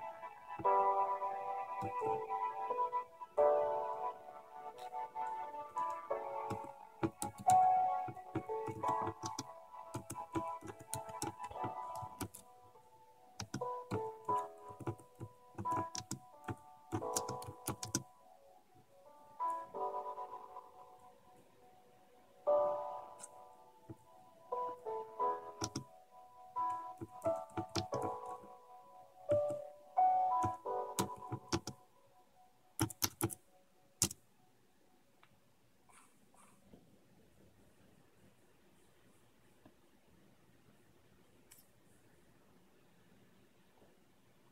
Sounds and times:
Music: 0.0s - 33.6s
Computer keyboard: 1.8s - 2.2s, 5.8s - 12.5s, 13.4s - 18.1s, 25.6s - 25.9s, 26.6s - 28.5s, 29.3s - 29.7s, 30.3s - 31.8s, 32.8s - 33.4s, 34.0s - 34.2s.

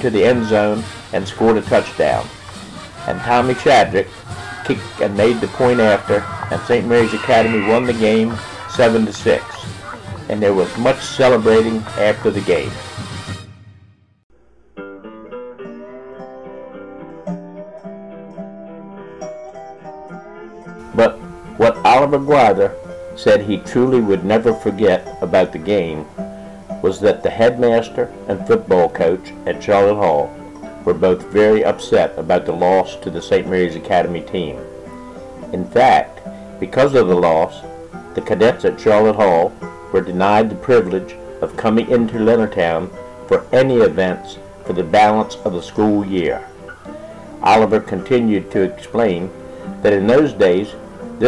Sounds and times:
Speech: 0.0s - 2.3s, 3.0s - 12.8s, 21.0s - 26.1s, 26.8s - 30.3s, 30.9s - 34.6s, 35.4s - 46.5s, 47.4s - 51.2s.

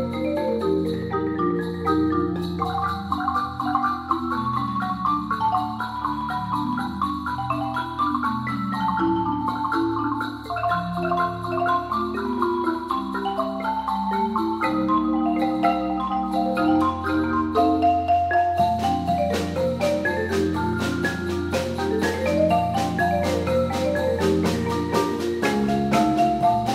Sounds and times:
Marimba, xylophone: 0.0s - 26.7s
Vibraphone: 0.0s - 26.7s.

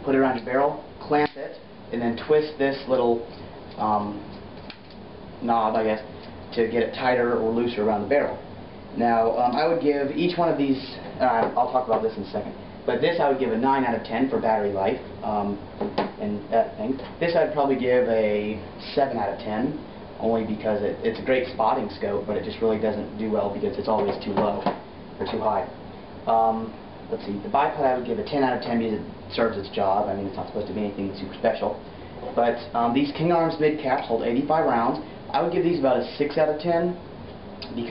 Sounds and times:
Speech: 0.0s - 4.3s, 5.4s - 8.4s, 9.0s - 37.0s, 37.6s - 37.9s.

